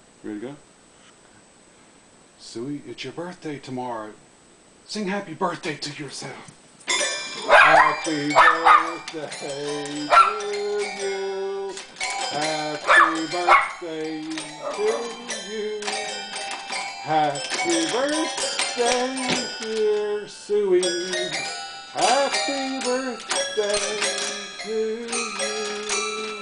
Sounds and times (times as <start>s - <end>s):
Inside, small room: 0.0s - 26.4s
Speech: 0.2s - 0.7s, 2.4s - 4.2s, 4.9s - 6.5s
Music: 6.9s - 26.4s
Bark: 7.5s - 9.0s, 10.1s - 10.4s, 12.9s - 13.8s
Singing: 7.5s - 26.4s.